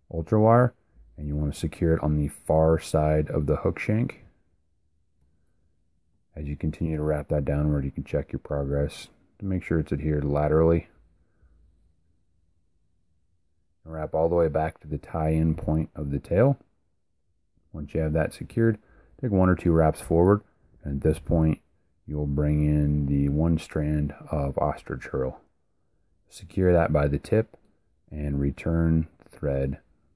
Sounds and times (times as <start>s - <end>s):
Speech: 0.0s - 4.4s, 6.3s - 11.0s, 13.8s - 16.7s, 17.7s - 25.5s, 26.3s - 29.9s.